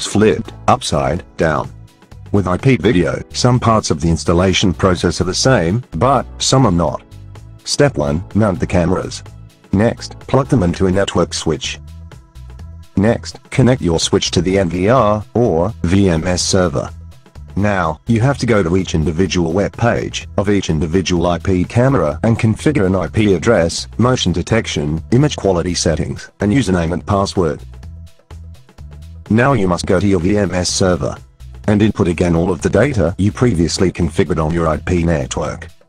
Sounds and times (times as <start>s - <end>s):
Speech: 0.0s - 1.7s, 2.3s - 7.0s, 7.6s - 11.8s, 13.0s - 16.9s, 17.6s - 27.6s, 29.3s - 35.8s.